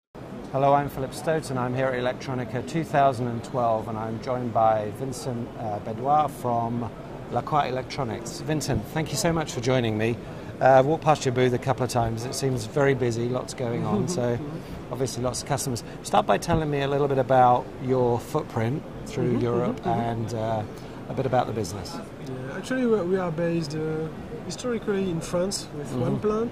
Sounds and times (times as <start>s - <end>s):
Speech: 0.5s - 26.5s.